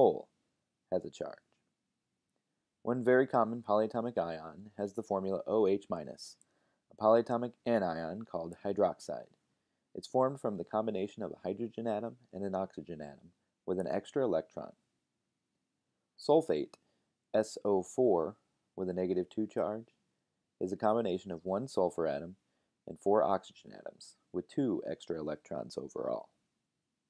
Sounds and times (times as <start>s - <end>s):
Speech: 0.0s - 0.3s, 0.9s - 1.5s, 2.9s - 9.4s, 10.0s - 14.8s, 16.2s - 20.0s, 20.6s - 26.4s.